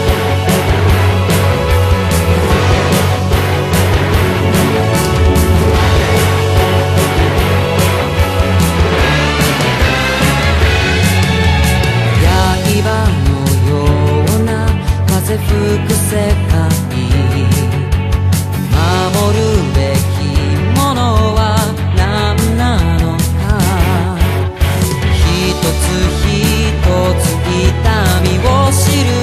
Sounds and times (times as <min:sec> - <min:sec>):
Video game music: 0:00.0 - 0:13.9.